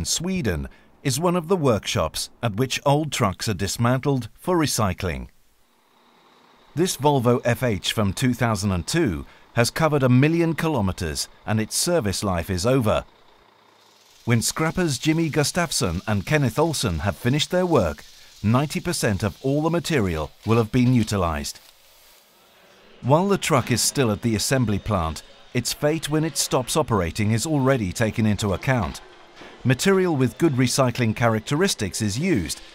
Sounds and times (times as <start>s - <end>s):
Speech: 0.0s - 5.3s, 6.8s - 13.1s, 14.3s - 21.6s, 23.0s - 29.0s, 29.6s - 32.7s.